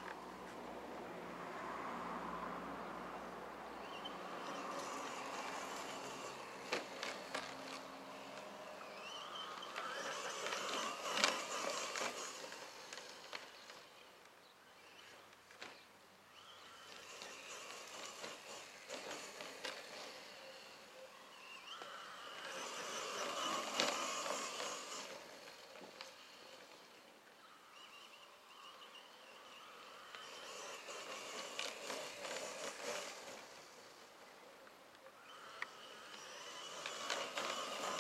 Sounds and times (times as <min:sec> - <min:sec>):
Vehicle: 0:00.0 - 0:38.0.